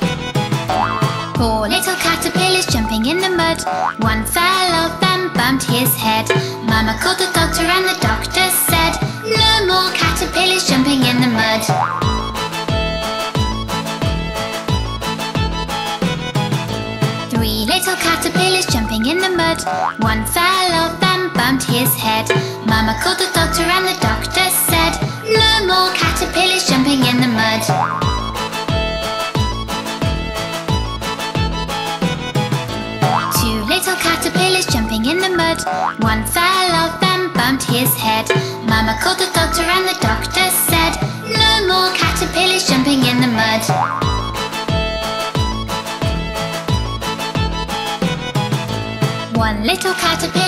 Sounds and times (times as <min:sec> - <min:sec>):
Music for children: 0:00.0 - 0:50.4.